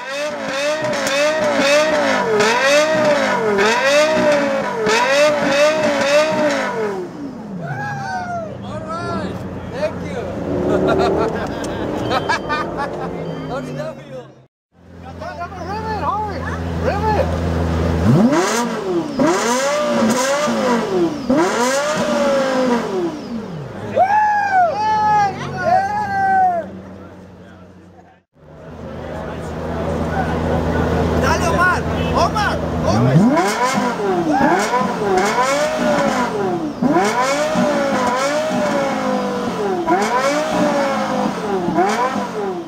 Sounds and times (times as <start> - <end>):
Accelerating, revving, vroom: 0.0 - 7.1, 10.3 - 13.1, 17.9 - 23.3, 32.8 - 42.6
Car: 0.0 - 42.6
Speech: 13.4 - 17.3, 24.8 - 33.2.